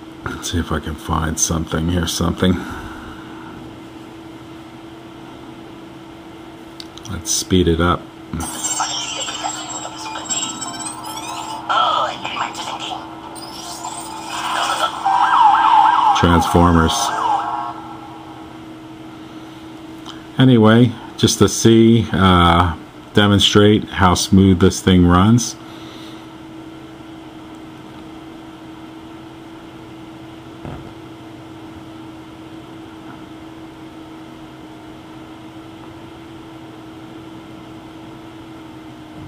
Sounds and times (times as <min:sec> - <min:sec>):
Speech: 0:00.2 - 0:02.7, 0:07.0 - 0:08.1, 0:16.2 - 0:17.2, 0:20.4 - 0:25.6
Police car (siren): 0:08.9 - 0:18.8.